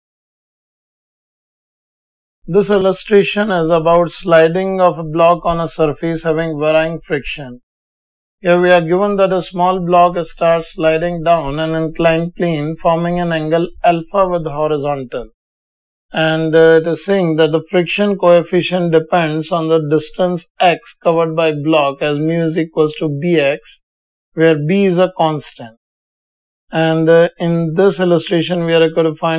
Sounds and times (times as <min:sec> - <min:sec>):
Inside, small room: 0:02.5 - 0:07.6, 0:08.4 - 0:15.4, 0:24.4 - 0:25.8, 0:26.7 - 0:29.3
Speech: 0:02.5 - 0:07.6, 0:08.4 - 0:15.3, 0:16.1 - 0:23.8, 0:24.4 - 0:25.8, 0:26.7 - 0:29.3.